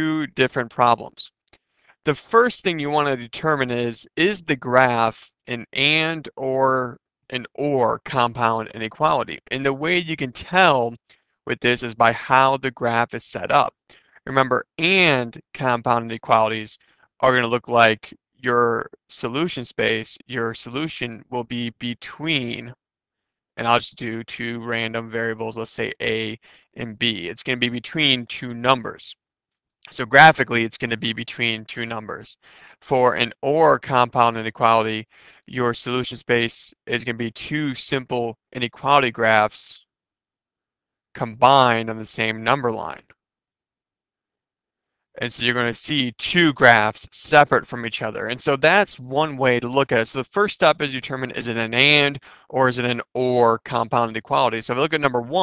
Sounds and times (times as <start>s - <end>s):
Speech: 0.0s - 1.3s, 2.1s - 22.8s, 23.6s - 29.2s, 29.8s - 39.8s, 41.2s - 43.0s, 45.2s - 55.4s.